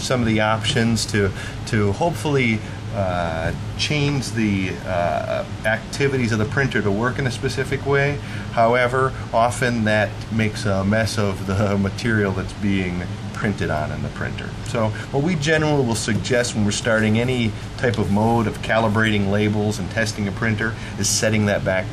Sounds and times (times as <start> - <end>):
Speech: 0.0 - 21.9.